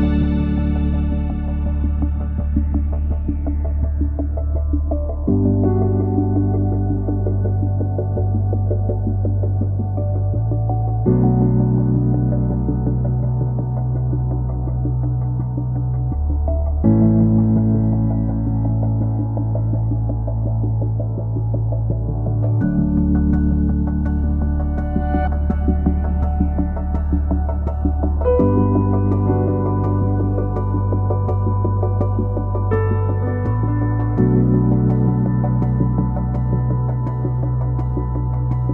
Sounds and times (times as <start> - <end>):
Music: 0.0 - 38.7.